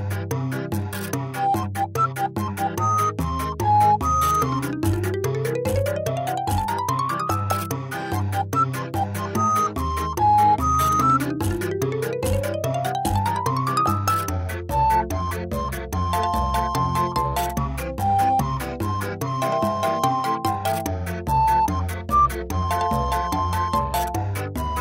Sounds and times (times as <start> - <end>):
Music: 0.0 - 24.8.